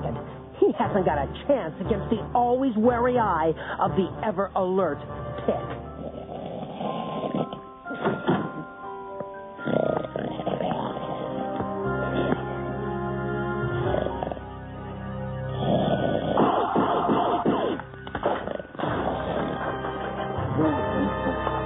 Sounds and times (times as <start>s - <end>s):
Music: 0.0s - 21.6s.